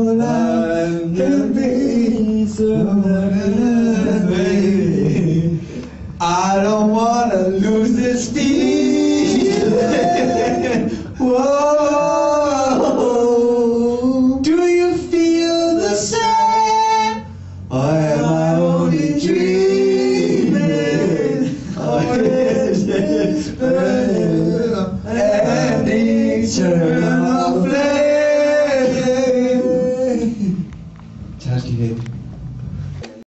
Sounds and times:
Male singing: 0:00.0 - 0:05.6, 0:06.2 - 0:30.7
Choir: 0:00.0 - 0:30.7.

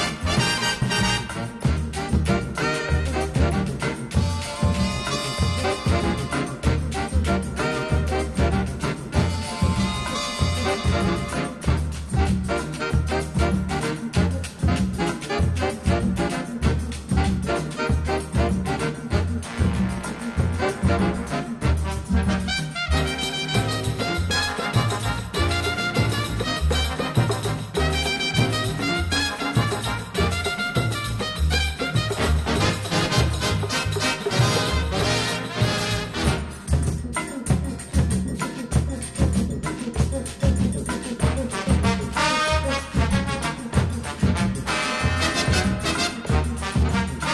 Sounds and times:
Music: 0:00.0 - 0:47.3.

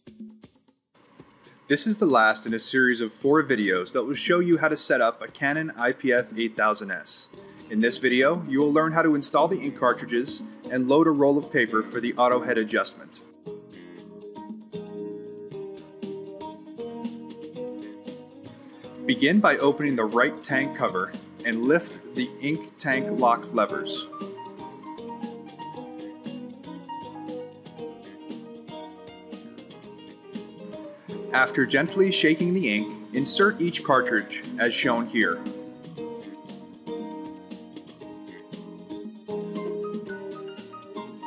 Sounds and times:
Music: 0:00.0 - 0:41.2
Speech: 0:01.7 - 0:13.3, 0:19.1 - 0:24.1, 0:31.3 - 0:35.5.

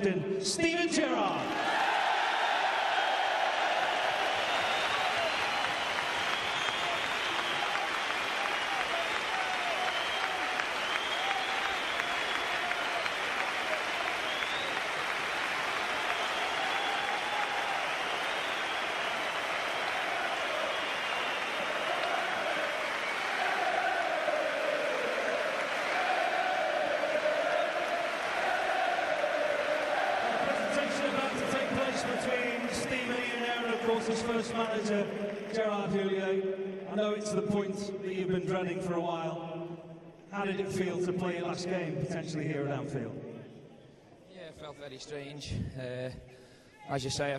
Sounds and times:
Male speech, man speaking: 0:00.0 - 0:01.5, 0:30.4 - 0:39.4, 0:40.3 - 0:43.2, 0:44.3 - 0:46.2, 0:46.8 - 0:47.3.

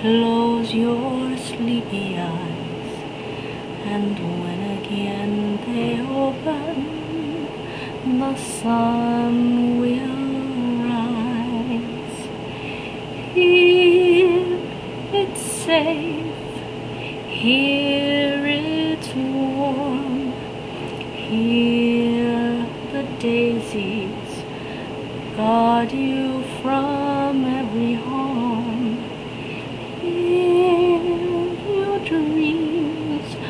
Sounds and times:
Lullaby: 0:00.0 - 0:33.5.

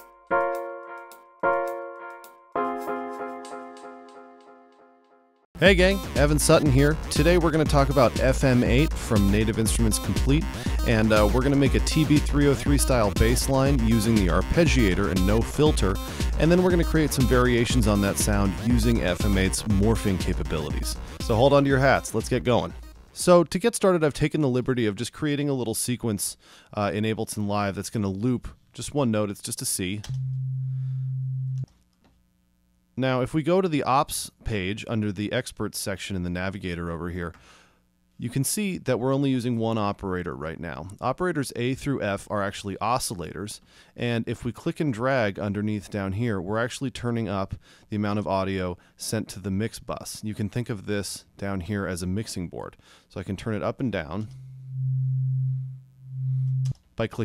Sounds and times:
Speech: 0:05.6 - 0:30.1, 0:33.0 - 0:37.4, 0:38.2 - 0:54.3, 0:57.0 - 0:57.2.

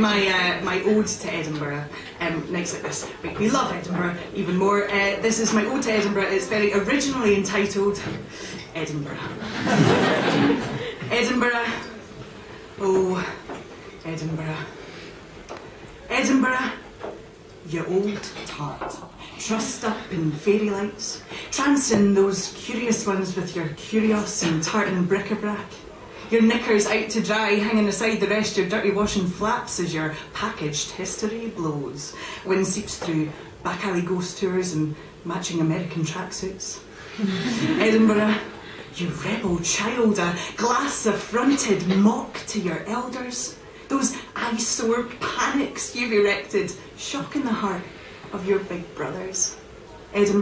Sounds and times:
Speech: 0:00.0 - 0:09.4, 0:11.1 - 0:12.1, 0:12.8 - 0:14.8, 0:16.1 - 0:16.9, 0:17.6 - 0:36.8, 0:37.6 - 0:50.4.

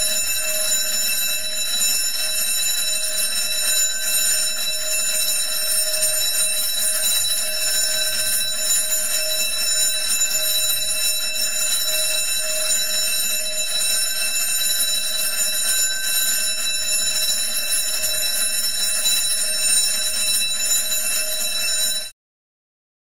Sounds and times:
Alarm: 0:00.0 - 0:22.2.

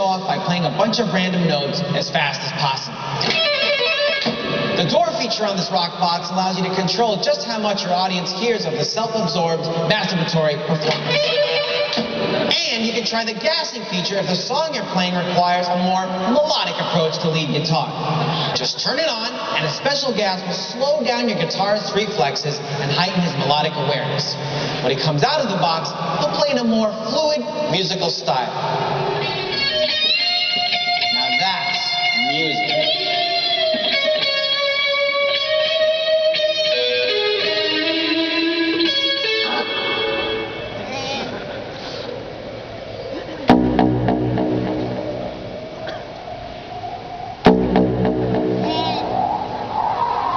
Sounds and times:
Crowd: 0:11.9 - 0:34.6, 0:39.4 - 0:43.9, 0:48.6 - 0:50.3
Progressive rock: 0:42.9 - 0:50.3.

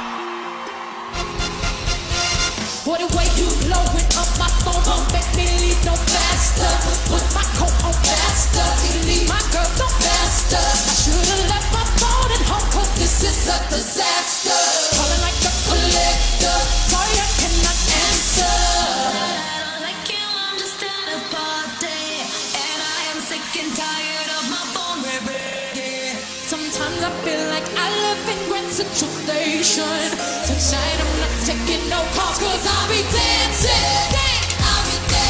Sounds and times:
Pop music: 0:00.0 - 0:35.2
Singing: 0:02.8 - 0:35.2.

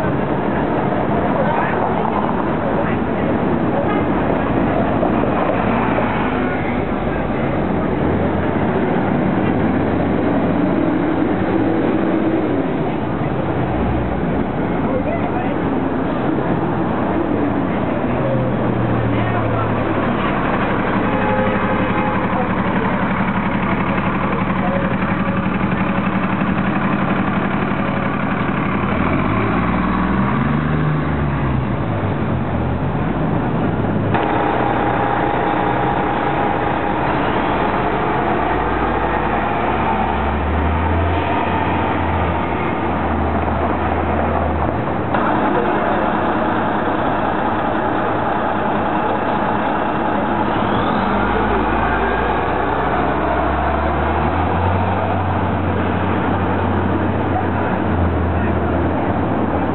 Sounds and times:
Speech: 0:00.0 - 0:29.5, 0:41.1 - 0:59.7
Bus: 0:00.0 - 0:59.7
Outside, urban or manmade: 0:00.0 - 0:59.7.

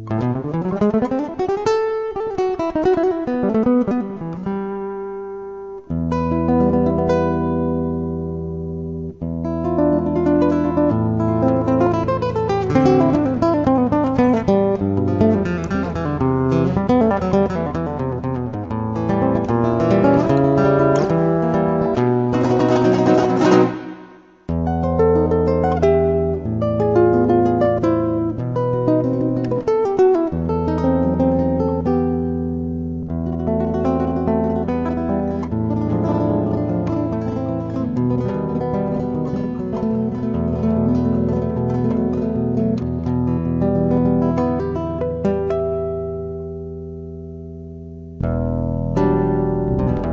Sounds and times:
Flamenco: 0:00.0 - 0:50.1
Guitar: 0:00.0 - 0:50.1.

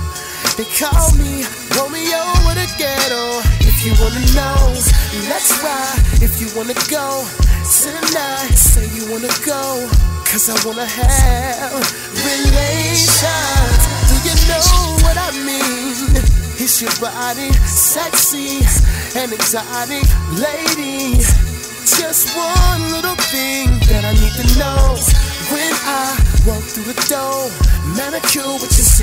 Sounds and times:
Hip hop music: 0:00.0 - 0:29.0
Rapping: 0:00.4 - 0:29.0.

